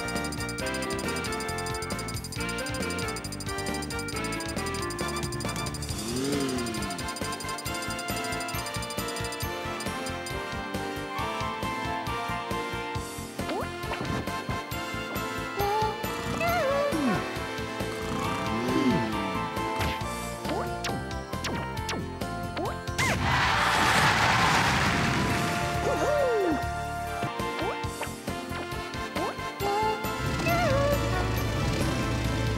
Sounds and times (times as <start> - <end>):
Music: 0.0 - 32.5.